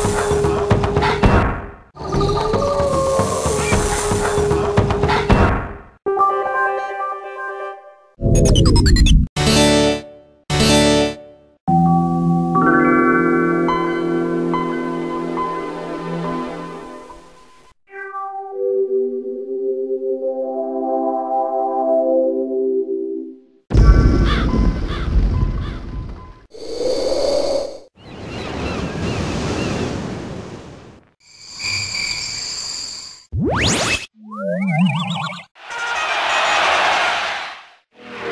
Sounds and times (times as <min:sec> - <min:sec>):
Sound effect: 0:00.0 - 0:05.8, 0:08.2 - 0:09.3, 0:33.3 - 0:38.3.